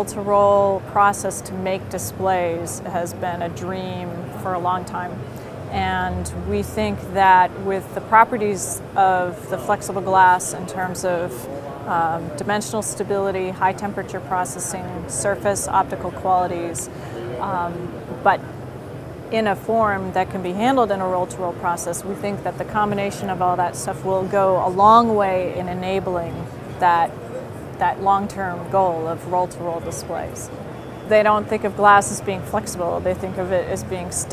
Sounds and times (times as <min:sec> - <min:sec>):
Speech: 0:00.0 - 0:18.4, 0:19.3 - 0:27.2, 0:27.8 - 0:30.5, 0:31.1 - 0:34.3.